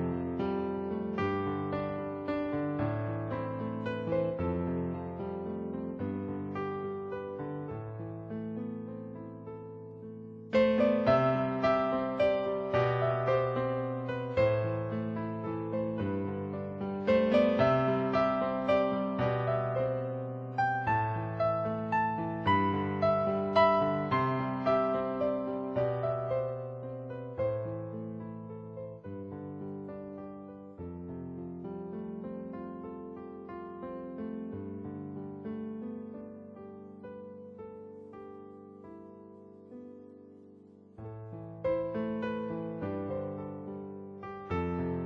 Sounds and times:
Electric piano: 0:00.0 - 0:45.0.

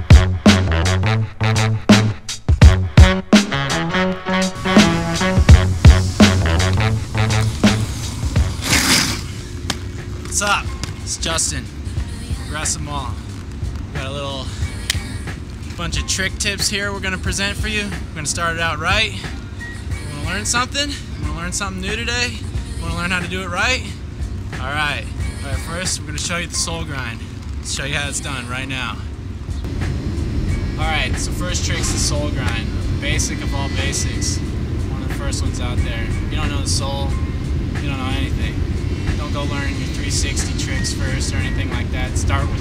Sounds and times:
Music: 0:00.0 - 0:42.6
Speech: 0:15.8 - 0:19.3, 0:30.8 - 0:37.2, 0:37.8 - 0:38.6, 0:39.2 - 0:42.6.

